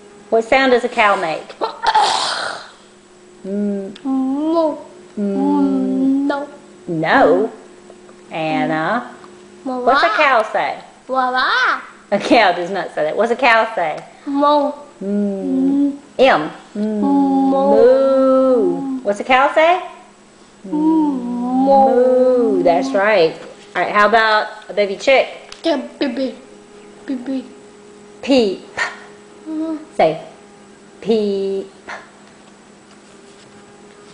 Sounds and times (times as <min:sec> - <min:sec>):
Female speech, woman speaking: 0:00.3 - 0:01.6, 0:05.2 - 0:07.6, 0:08.3 - 0:09.2, 0:09.8 - 0:10.9, 0:12.1 - 0:14.1, 0:15.1 - 0:20.0, 0:21.5 - 0:25.4, 0:27.1 - 0:27.6, 0:28.2 - 0:28.8, 0:29.9 - 0:30.4, 0:31.0 - 0:31.8
Conversation: 0:00.3 - 0:33.3
Child speech, kid speaking: 0:04.1 - 0:06.6, 0:09.7 - 0:10.5, 0:11.1 - 0:12.0, 0:14.3 - 0:14.9, 0:20.8 - 0:23.3, 0:25.6 - 0:26.4, 0:29.5 - 0:29.9.